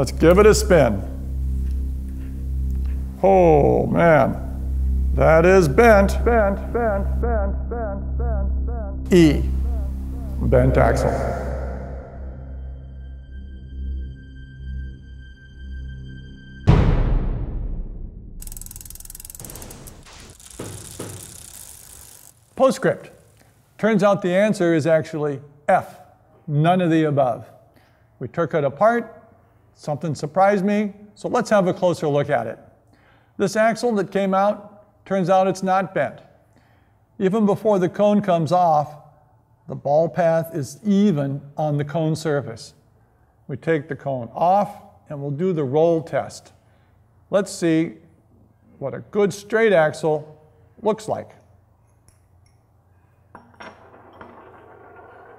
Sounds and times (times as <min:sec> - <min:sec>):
Speech: 0:00.0 - 0:01.1, 0:03.2 - 0:04.4, 0:09.1 - 0:09.6, 0:10.4 - 0:11.5, 0:22.6 - 0:23.2, 0:23.8 - 0:27.5, 0:28.2 - 0:29.2, 0:29.8 - 0:32.6, 0:33.4 - 0:36.2, 0:37.2 - 0:39.0, 0:39.7 - 0:42.8, 0:43.5 - 0:46.6, 0:47.3 - 0:48.1, 0:48.8 - 0:51.4.